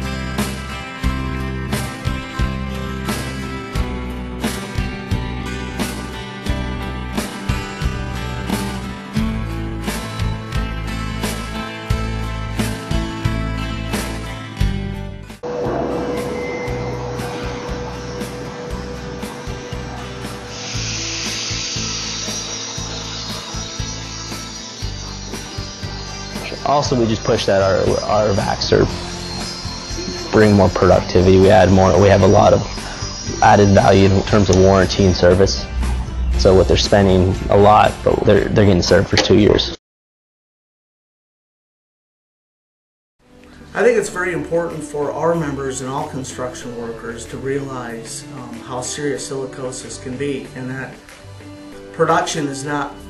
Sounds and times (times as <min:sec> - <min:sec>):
Music: 0:00.0 - 0:39.8, 0:43.2 - 0:53.1
Drill: 0:19.5 - 0:26.8.